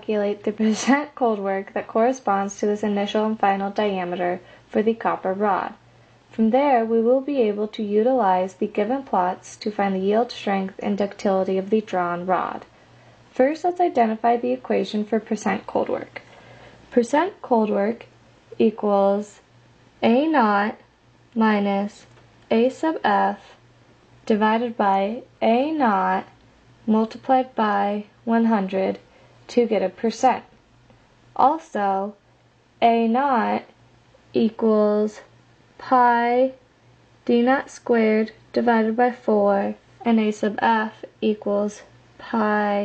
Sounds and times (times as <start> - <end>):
Speech: 0.0 - 12.7, 13.3 - 16.3, 16.9 - 19.4, 20.0 - 20.8, 21.4 - 23.6, 24.2 - 30.6, 31.4 - 32.2, 32.8 - 33.8, 34.4 - 36.6, 37.2 - 42.8.